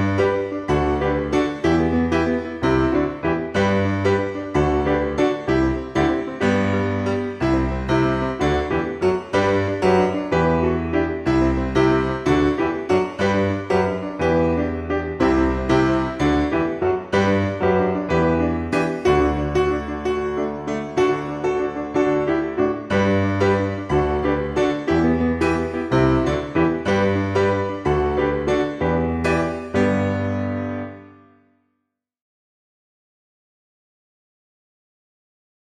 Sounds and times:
Music: 0:00.0 - 0:32.0.

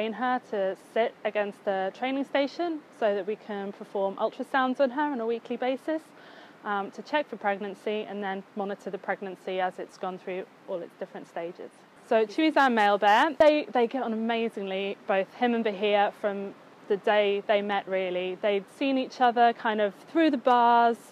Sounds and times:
Speech: 0:00.0 - 0:06.1, 0:06.7 - 0:21.1.

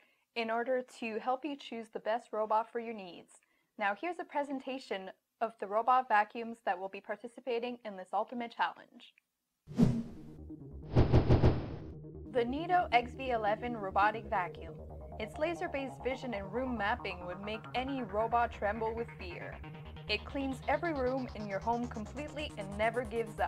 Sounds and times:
Speech: 0:00.4 - 0:09.2, 0:12.4 - 0:23.4
Music: 0:10.1 - 0:11.0, 0:11.8 - 0:23.4.

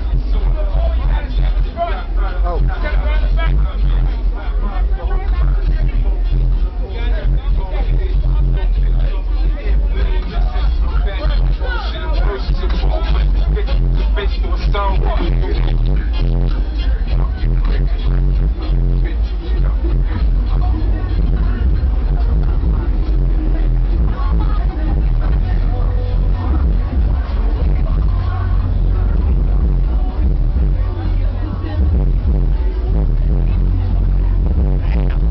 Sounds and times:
Music: 0:00.0 - 0:35.3
Speech: 0:00.0 - 0:35.3.

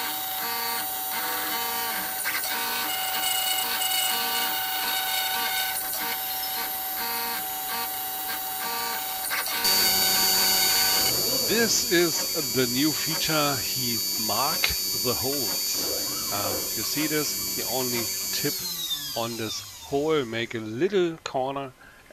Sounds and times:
Hum: 0:00.0 - 0:20.8
Mains hum: 0:00.0 - 0:22.1.

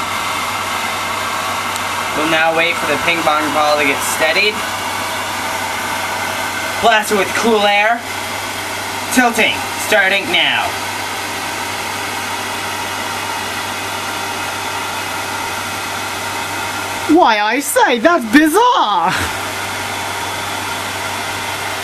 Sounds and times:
Speech: 0:02.2 - 0:04.6, 0:06.8 - 0:08.0, 0:09.1 - 0:10.8, 0:17.1 - 0:19.3.

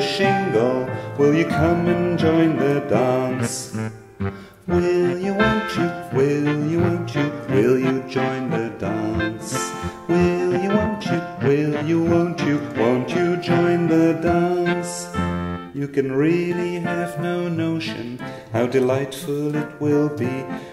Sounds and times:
Music: 0:00.0 - 0:20.7.

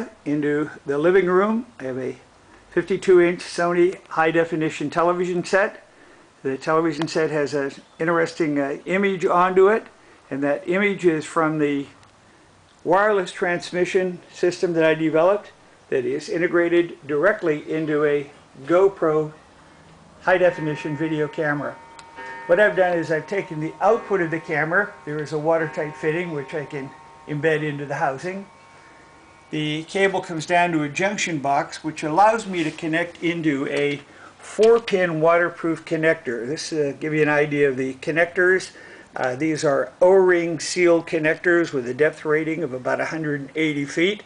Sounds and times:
Speech: 0:00.0 - 0:12.0, 0:12.8 - 0:19.4, 0:20.2 - 0:21.8, 0:22.5 - 0:28.5, 0:29.5 - 0:44.2.

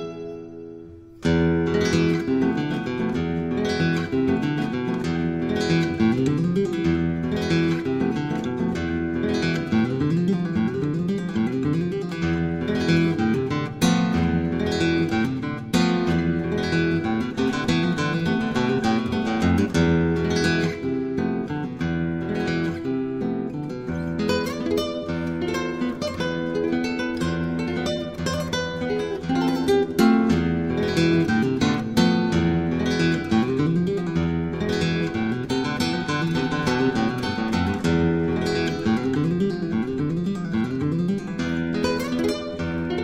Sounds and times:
Acoustic guitar: 0:00.0 - 0:43.0.

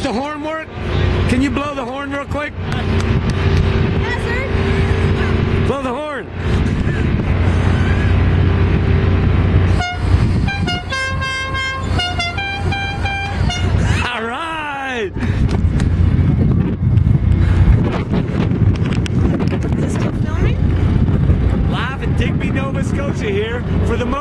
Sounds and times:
Motorboat, speedboat: 0:00.0 - 0:14.2, 0:15.2 - 0:24.2.

